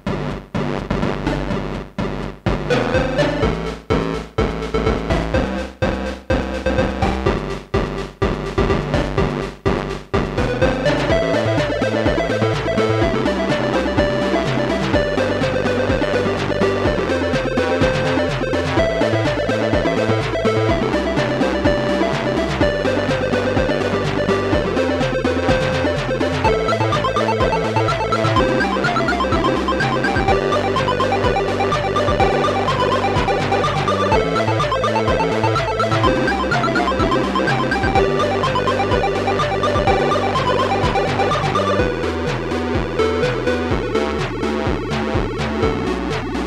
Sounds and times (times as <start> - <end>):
Video game music: 0.0 - 46.4.